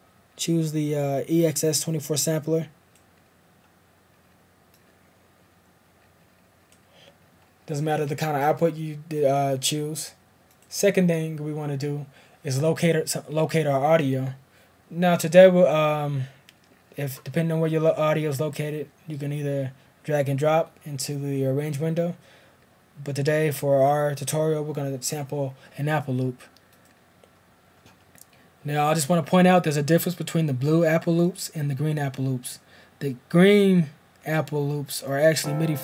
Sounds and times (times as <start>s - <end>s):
Speech: 0.4s - 2.8s, 7.7s - 16.4s, 17.0s - 22.2s, 23.0s - 26.5s, 28.6s - 35.8s.